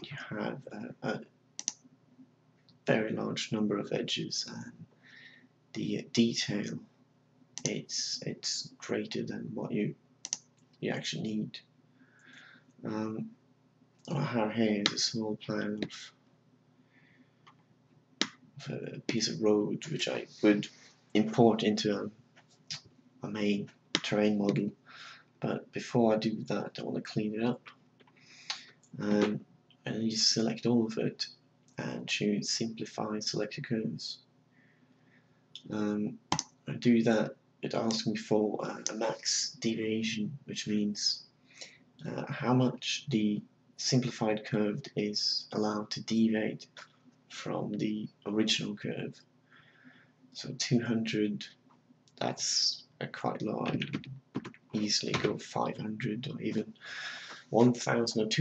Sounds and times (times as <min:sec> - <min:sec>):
Speech: 0:00.0 - 0:01.3, 0:02.9 - 0:04.9, 0:05.8 - 0:06.9, 0:07.6 - 0:10.0, 0:10.8 - 0:11.6, 0:12.8 - 0:13.3, 0:14.1 - 0:16.1, 0:18.6 - 0:22.1, 0:23.2 - 0:24.8, 0:25.4 - 0:27.7, 0:28.5 - 0:34.3, 0:35.6 - 0:41.2, 0:42.0 - 0:49.2, 0:50.4 - 0:51.6, 0:52.2 - 0:58.4.